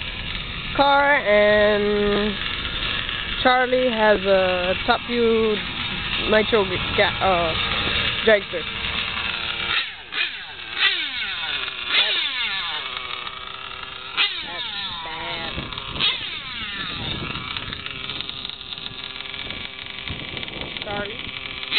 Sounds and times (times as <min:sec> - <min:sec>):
Outside, urban or manmade: 0:00.0 - 0:21.7.